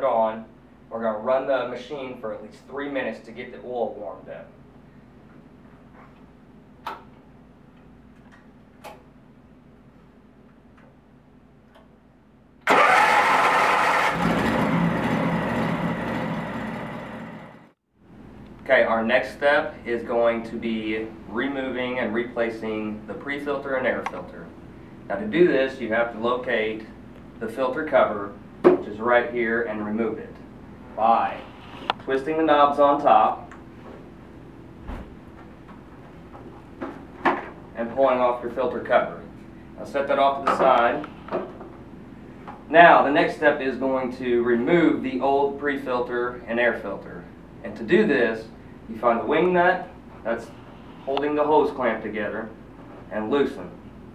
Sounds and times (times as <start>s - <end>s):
Speech: 0.0s - 4.6s, 18.6s - 24.5s, 25.1s - 33.5s, 37.8s - 41.1s, 42.7s - 53.8s
Heavy engine (low frequency): 12.7s - 17.7s.